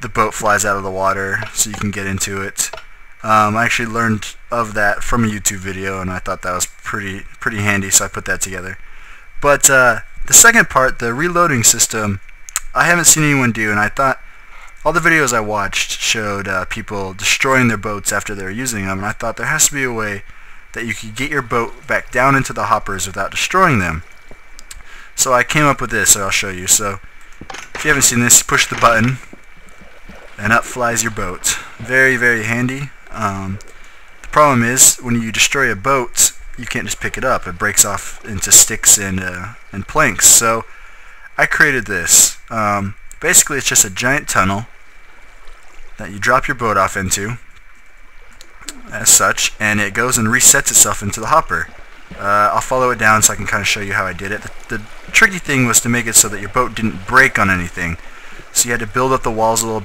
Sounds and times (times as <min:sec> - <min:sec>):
Speech: 0:00.0 - 0:08.8, 0:09.4 - 0:14.2, 0:14.8 - 0:20.2, 0:20.8 - 0:24.0, 0:25.2 - 0:27.0, 0:27.8 - 0:29.3, 0:30.4 - 0:33.6, 0:34.3 - 0:40.7, 0:41.4 - 0:44.7, 0:46.0 - 0:47.4, 0:48.7 - 0:59.8.